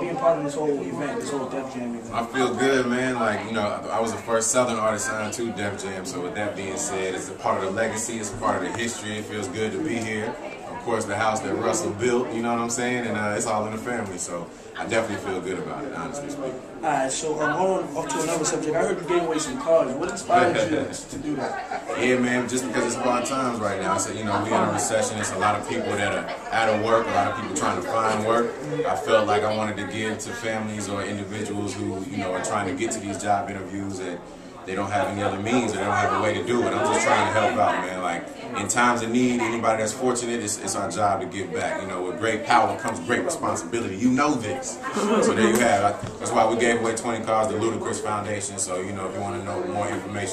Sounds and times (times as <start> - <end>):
Speech: 17.2 - 50.3.